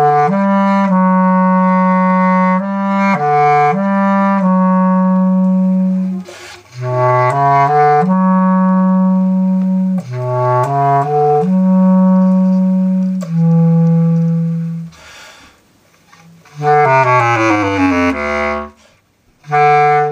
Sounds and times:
Brass instrument: 0:00.0 - 0:15.1, 0:16.1 - 0:20.1
Saxophone: 0:00.0 - 0:15.2, 0:15.9 - 0:20.1.

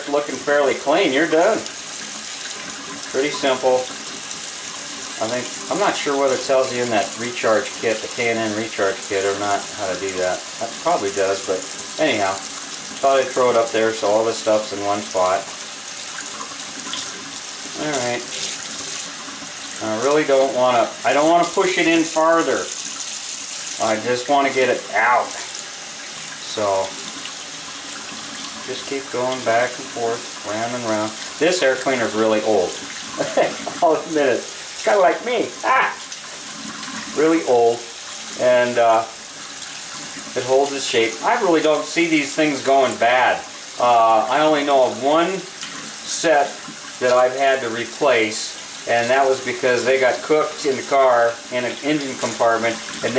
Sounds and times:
Speech: 0:00.0 - 0:01.7, 0:03.1 - 0:03.9, 0:05.2 - 0:15.5, 0:17.8 - 0:18.4, 0:19.8 - 0:22.8, 0:23.8 - 0:25.5, 0:26.4 - 0:27.0, 0:28.7 - 0:36.0, 0:37.1 - 0:39.2, 0:40.4 - 0:53.1.

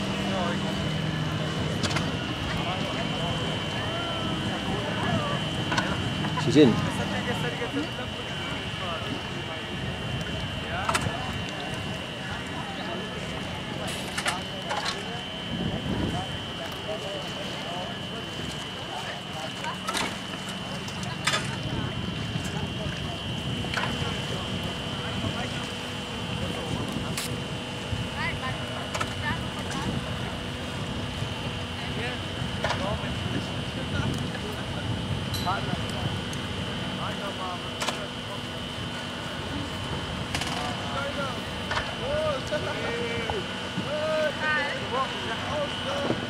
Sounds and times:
Speech: 0:00.0 - 0:46.3.

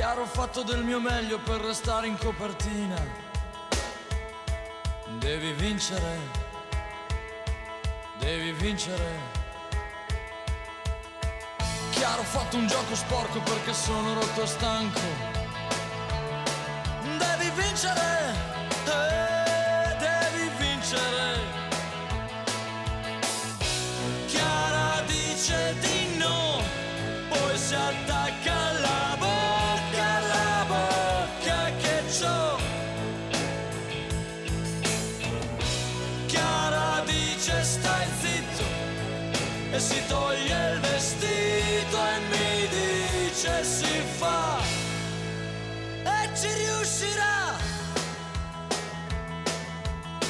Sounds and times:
Music: 0:00.0 - 0:50.2.

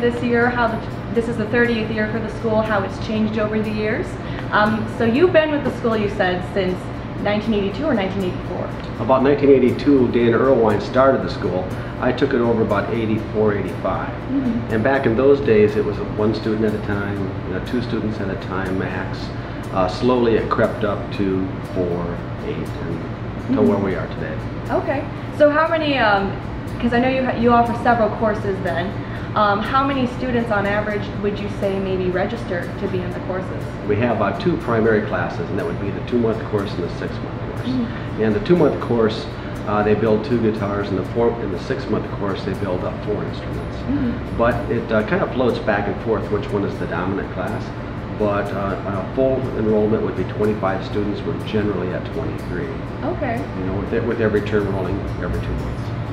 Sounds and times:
Speech: 0:04.5 - 0:26.3, 0:33.8 - 0:55.9.

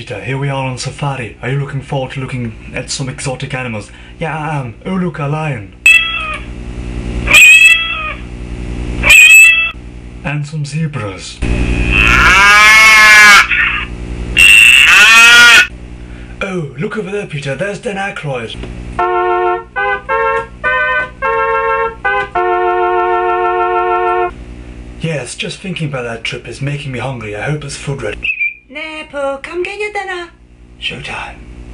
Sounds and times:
Speech: 0:00.0 - 0:05.8, 0:10.2 - 0:11.4, 0:16.4 - 0:18.6, 0:25.0 - 0:31.4
Animal: 0:11.9 - 0:15.7
Music: 0:19.0 - 0:24.3.

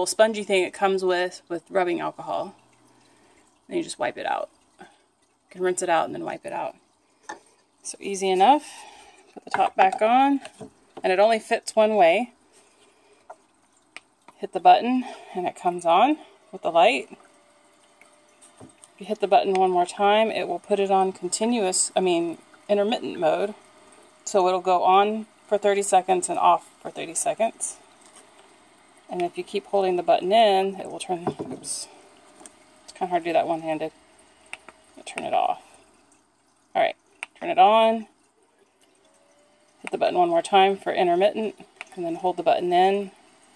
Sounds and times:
Speech: 0:00.0 - 0:02.6, 0:03.7 - 0:04.5, 0:05.6 - 0:06.8, 0:07.9 - 0:08.8, 0:09.4 - 0:12.3, 0:14.4 - 0:17.2, 0:19.0 - 0:23.6, 0:24.3 - 0:27.8, 0:29.1 - 0:31.9, 0:32.9 - 0:34.0, 0:35.0 - 0:35.7, 0:36.8 - 0:38.1, 0:39.9 - 0:43.2
Inside, small room: 0:00.0 - 0:43.5.

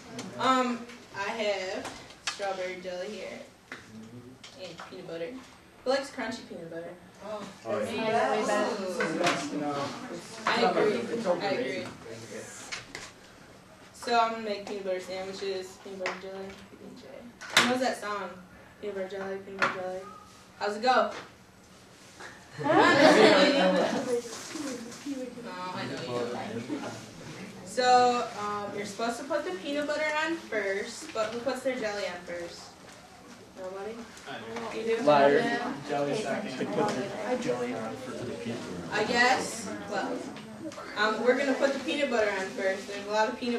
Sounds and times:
Conversation: 0:00.0 - 0:43.5
Female speech, woman speaking: 0:00.3 - 0:03.5, 0:04.6 - 0:12.0, 0:14.0 - 0:20.0, 0:20.6 - 0:21.2, 0:22.7 - 0:24.3, 0:25.1 - 0:26.9, 0:27.6 - 0:32.8, 0:33.6 - 0:43.5
Male speech, man speaking: 0:07.6 - 0:12.6, 0:25.8 - 0:26.9, 0:34.3 - 0:40.2.

